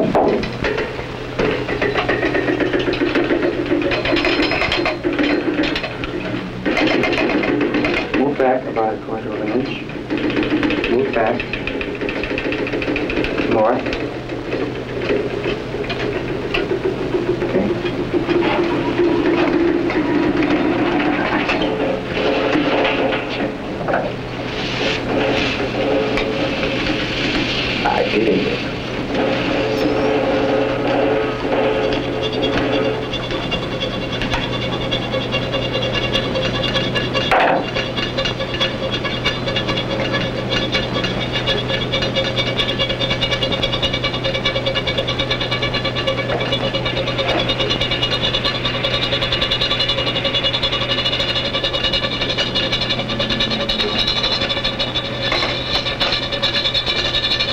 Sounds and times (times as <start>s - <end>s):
Speech: 8.2s - 9.9s, 10.9s - 11.4s, 13.4s - 13.9s, 27.8s - 28.6s.